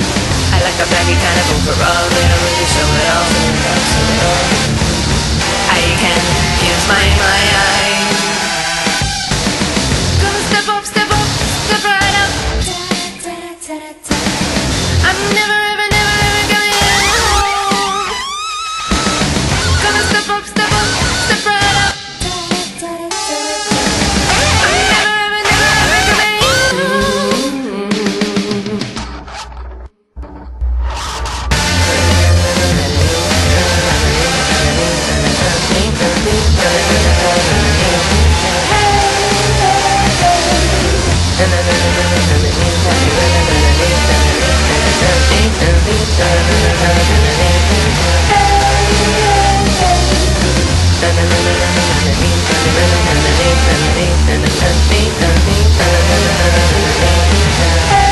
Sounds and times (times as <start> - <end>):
Music: 0.0 - 58.1.